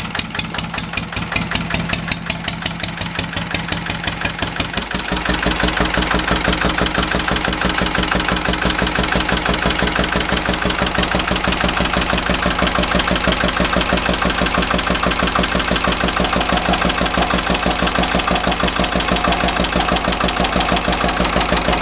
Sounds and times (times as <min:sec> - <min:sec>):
Idling: 0:00.0 - 0:21.8.